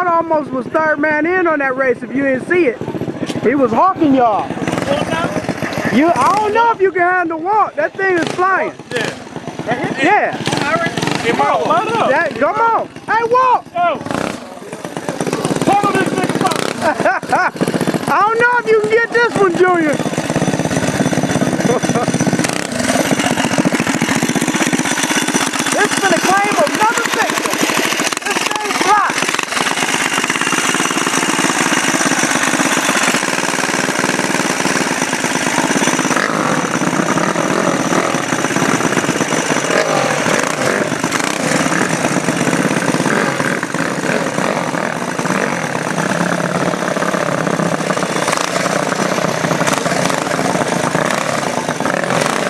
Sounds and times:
Motorcycle: 0:00.0 - 0:52.4
Outside, urban or manmade: 0:00.0 - 0:52.4.

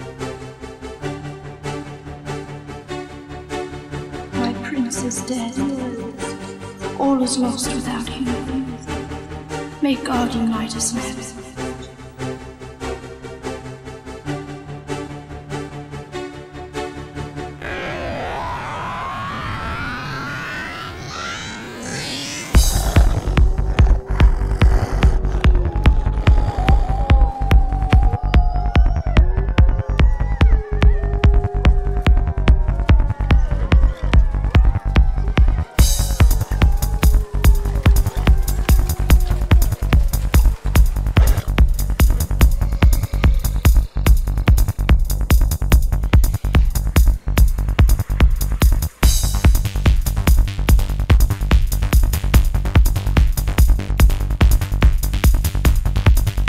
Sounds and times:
Music: 0:00.0 - 0:20.8, 0:22.1 - 0:56.4.

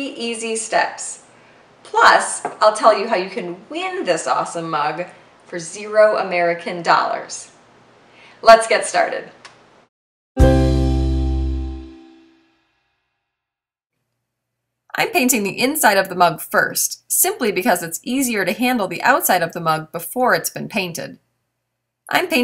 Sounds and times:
Speech: 0:00.0 - 0:01.3, 0:01.9 - 0:07.6, 0:08.4 - 0:09.4, 0:14.9 - 0:21.2, 0:22.1 - 0:22.4
Music: 0:10.4 - 0:12.9.

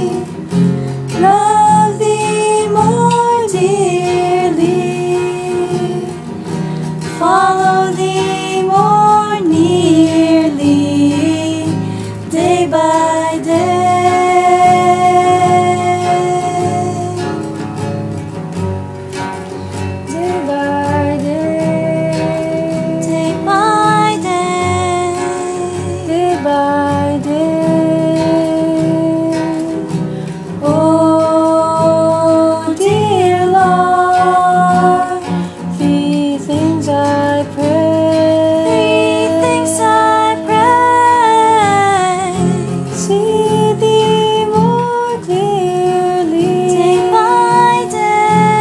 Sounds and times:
Female singing: 0:00.0 - 0:06.4, 0:07.0 - 0:17.5, 0:20.1 - 0:30.0, 0:30.6 - 0:48.6
Music: 0:00.0 - 0:48.6.

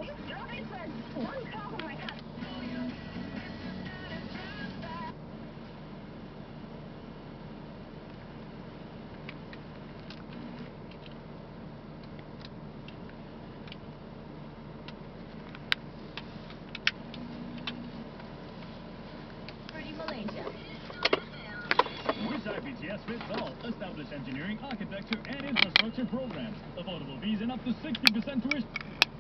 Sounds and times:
Radio: 0:00.0 - 0:05.1, 0:19.7 - 0:28.9.

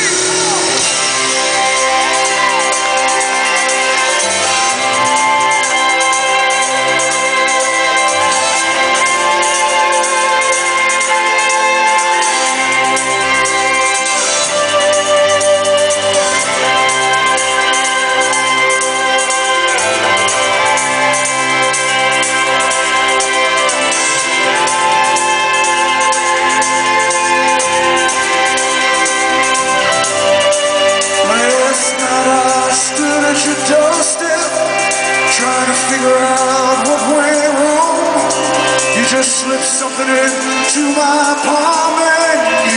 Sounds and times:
Music: 0:00.0 - 0:42.7.

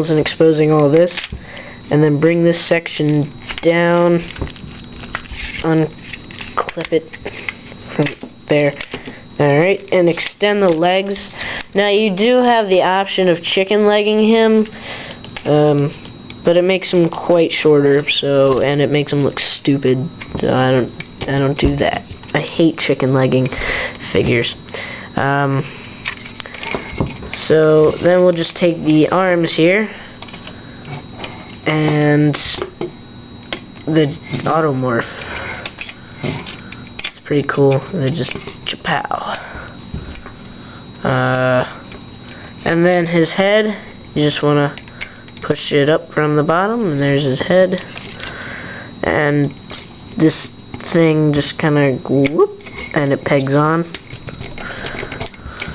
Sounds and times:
Speech: 0:00.0 - 0:01.3, 0:01.9 - 0:04.3, 0:05.6 - 0:05.9, 0:08.0 - 0:08.8, 0:09.4 - 0:14.7, 0:15.4 - 0:24.6, 0:25.2 - 0:25.7, 0:27.4 - 0:30.0, 0:31.7 - 0:32.7, 0:33.9 - 0:35.1, 0:37.2 - 0:39.4, 0:41.0 - 0:41.7, 0:42.6 - 0:44.8, 0:45.4 - 0:47.9, 0:49.0 - 0:49.6, 0:50.2 - 0:54.0.

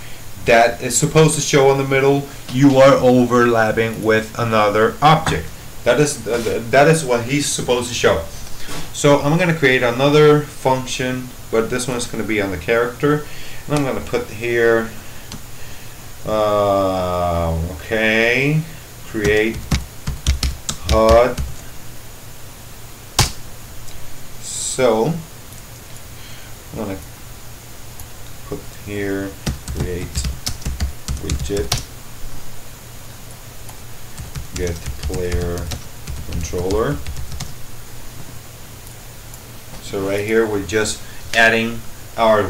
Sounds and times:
Computer keyboard: 0:19.2 - 0:21.6, 0:29.4 - 0:31.9, 0:34.2 - 0:37.6.

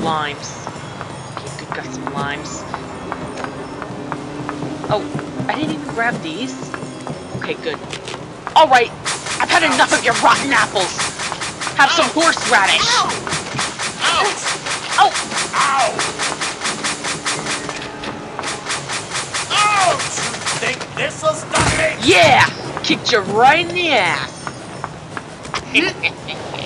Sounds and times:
Speech: 0:00.0 - 0:00.6, 0:01.4 - 0:02.6, 0:04.9 - 0:06.7, 0:07.4 - 0:07.8, 0:08.6 - 0:11.0, 0:11.8 - 0:13.2, 0:14.0 - 0:16.0, 0:19.5 - 0:24.3
Music: 0:16.3 - 0:19.9.

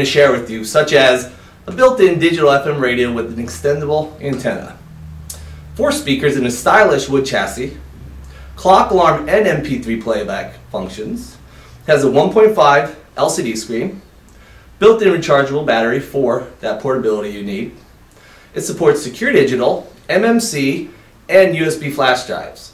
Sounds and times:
Speech: 0:00.0 - 0:04.8, 0:05.8 - 0:07.8, 0:08.6 - 0:14.0, 0:14.8 - 0:17.8, 0:18.5 - 0:22.7.

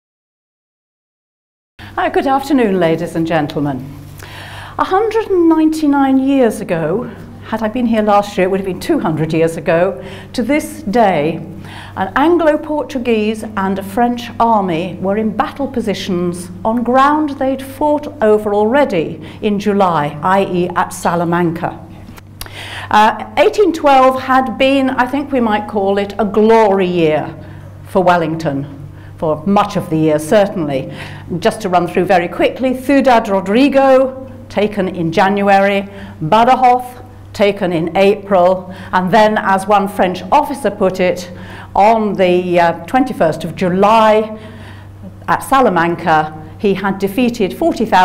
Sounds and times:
Speech: 0:02.0 - 0:03.9, 0:04.8 - 0:21.9, 0:22.9 - 0:44.4, 0:45.2 - 0:48.0.

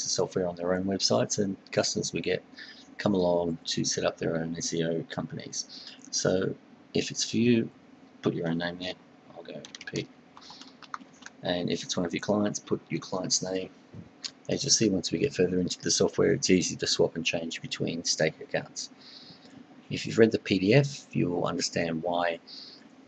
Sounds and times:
Speech: 0:00.0 - 0:10.7, 0:11.4 - 0:13.7, 0:14.3 - 0:19.0, 0:19.9 - 0:22.8.

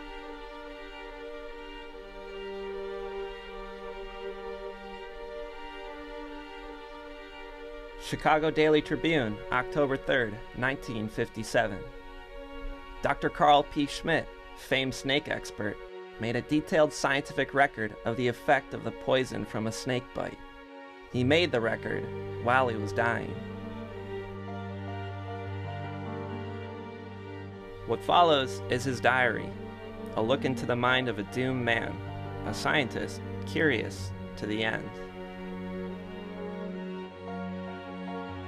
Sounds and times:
Music: 0:00.0 - 0:38.4
Speech: 0:08.0 - 0:11.9, 0:13.1 - 0:20.4, 0:21.2 - 0:23.4, 0:27.9 - 0:29.6, 0:30.2 - 0:35.0.

